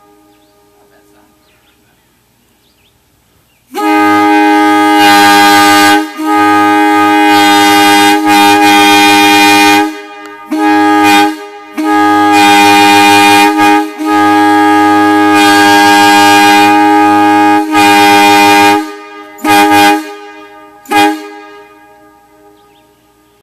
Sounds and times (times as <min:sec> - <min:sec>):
Air horn, truck horn: 0:00.0 - 0:00.6, 0:03.7 - 0:22.7
Outside, urban or manmade: 0:00.0 - 0:23.4
Vehicle horn, car horn, honking: 0:03.7 - 0:22.9.